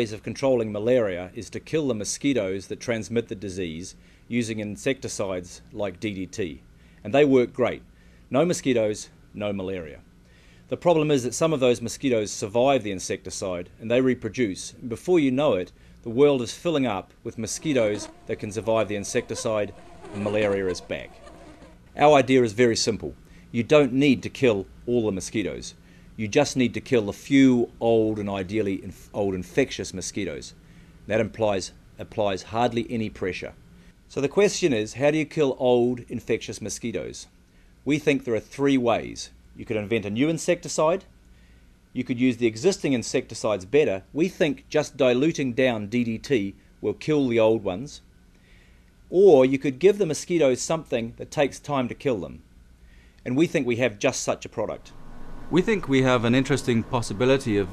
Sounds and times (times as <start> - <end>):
Bee, wasp, etc.: 17.6 - 21.8
Fly, housefly: 17.6 - 21.8.